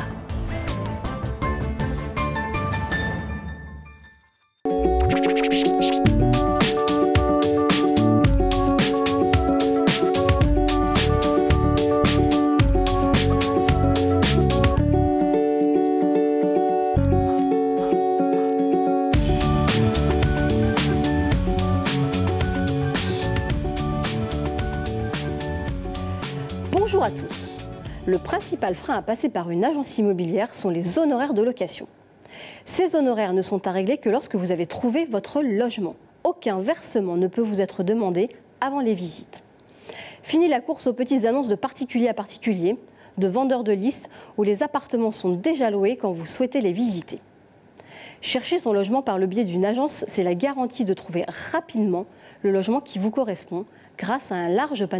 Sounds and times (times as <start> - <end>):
Music: 0.0 - 29.2
Speech: 26.7 - 31.9, 32.7 - 39.4, 40.3 - 47.2, 48.2 - 54.9.